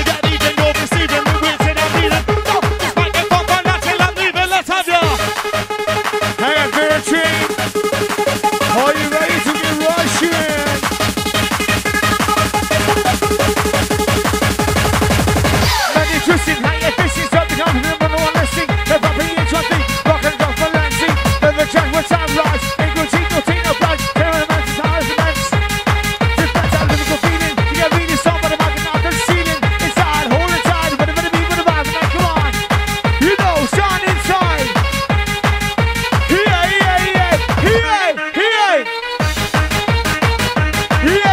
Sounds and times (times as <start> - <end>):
Techno: 0.0 - 41.3.